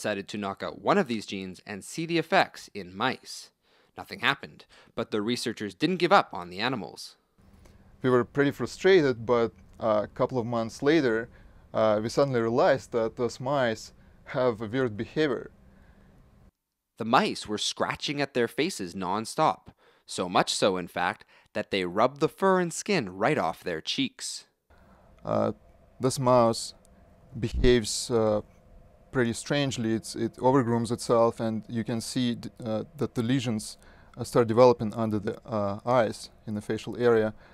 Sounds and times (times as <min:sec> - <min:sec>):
Speech: 0:00.0 - 0:07.2, 0:08.0 - 0:15.5, 0:17.0 - 0:24.6, 0:25.2 - 0:26.8, 0:27.4 - 0:28.4, 0:29.2 - 0:37.4.